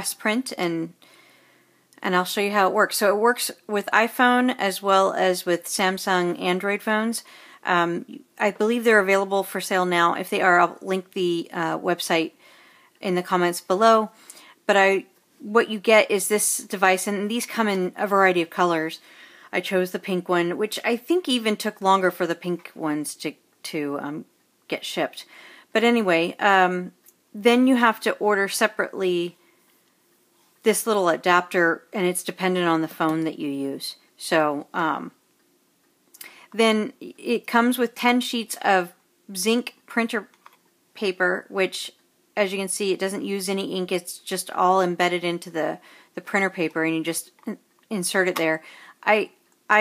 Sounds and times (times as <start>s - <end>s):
Speech: 0.0s - 1.0s, 2.0s - 12.4s, 13.0s - 29.4s, 30.6s - 35.2s, 36.6s - 40.3s, 41.0s - 49.8s.